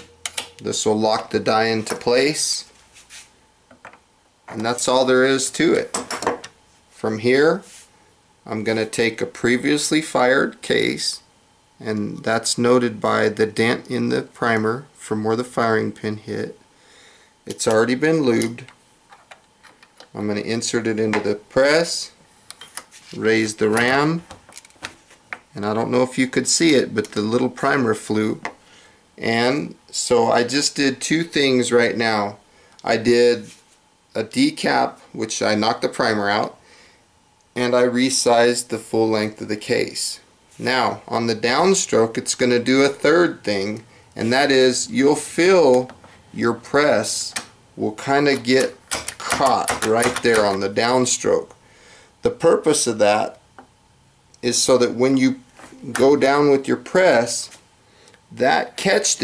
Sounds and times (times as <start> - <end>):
Inside, small room: 0.0 - 59.2
Speech: 0.6 - 2.7, 4.5 - 6.0, 7.0 - 7.7, 8.4 - 16.6, 17.5 - 18.7, 20.1 - 22.2, 23.1 - 24.3, 25.5 - 28.5, 29.2 - 36.6, 37.6 - 51.6, 52.2 - 53.4, 54.4 - 57.6, 58.3 - 59.2.